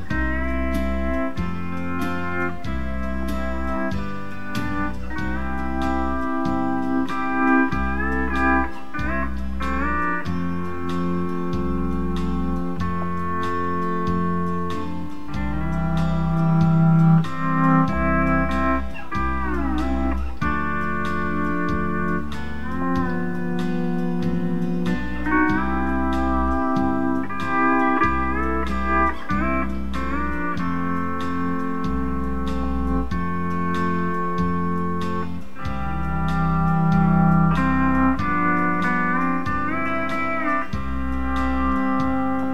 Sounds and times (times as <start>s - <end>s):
Steel guitar, slide guitar: 0.0s - 42.5s.